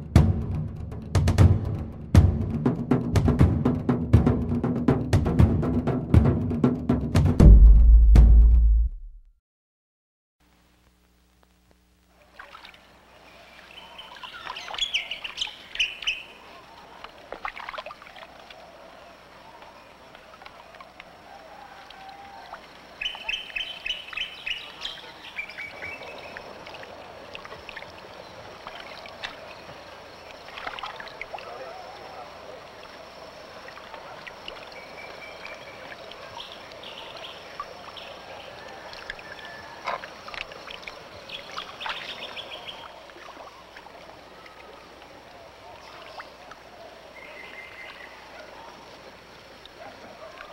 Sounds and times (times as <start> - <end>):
Stream: 12.1 - 50.5
Speech: 31.4 - 32.8.